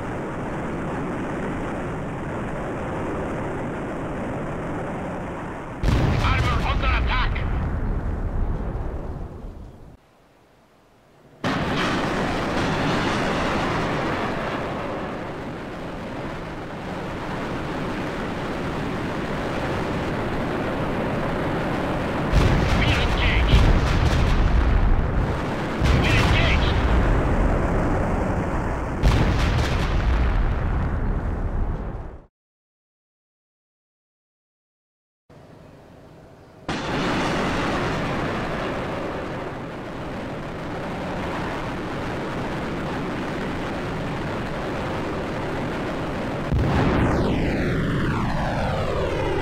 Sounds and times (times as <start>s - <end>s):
Artillery fire: 5.7s - 9.4s, 11.4s - 32.3s, 36.7s - 49.4s.